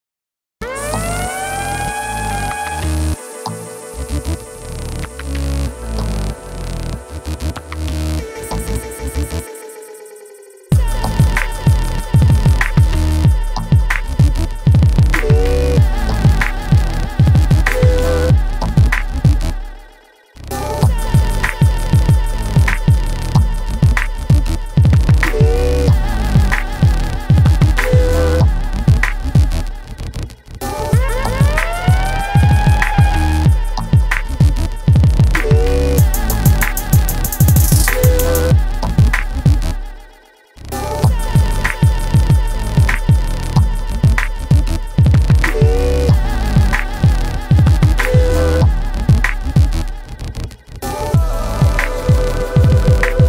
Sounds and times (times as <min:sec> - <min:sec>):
Music: 0:00.6 - 0:53.2.